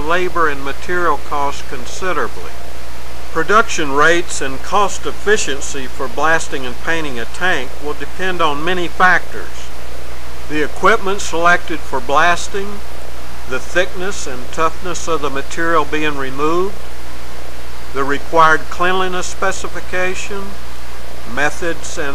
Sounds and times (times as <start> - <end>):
Speech: 0.0 - 2.6, 3.4 - 9.7, 10.5 - 12.8, 13.5 - 16.8, 18.0 - 20.6, 21.3 - 22.1.